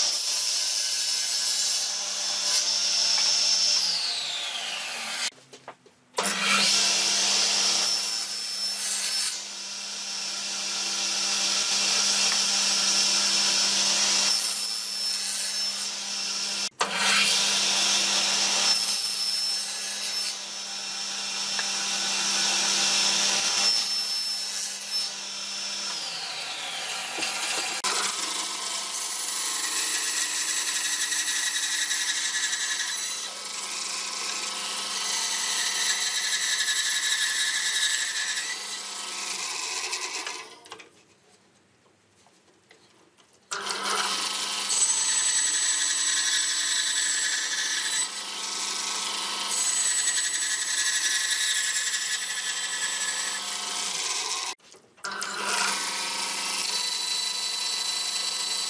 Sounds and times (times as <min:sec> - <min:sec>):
Sawing: 0:00.0 - 0:05.4, 0:06.2 - 0:40.9, 0:43.5 - 0:58.6.